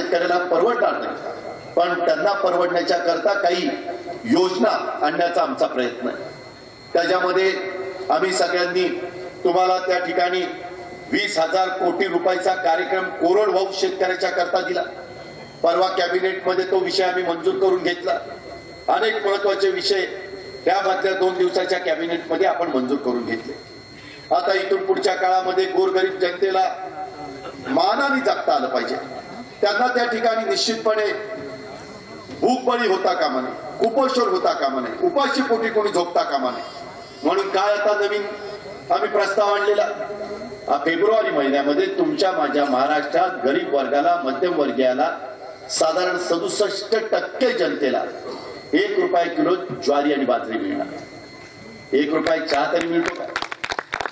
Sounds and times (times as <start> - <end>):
Male speech, man speaking: 0.0 - 6.3, 6.9 - 15.0, 15.6 - 18.3, 18.9 - 23.6, 24.3 - 31.4, 32.3 - 40.1, 40.7 - 51.0, 51.9 - 53.4
Narration, monologue: 0.0 - 54.0.